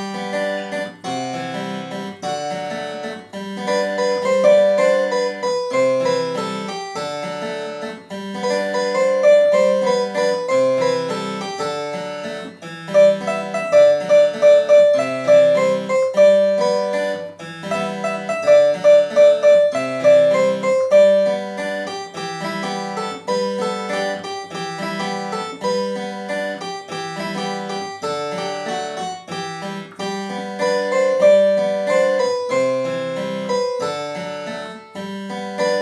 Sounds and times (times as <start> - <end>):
Piano: 0.0 - 35.8.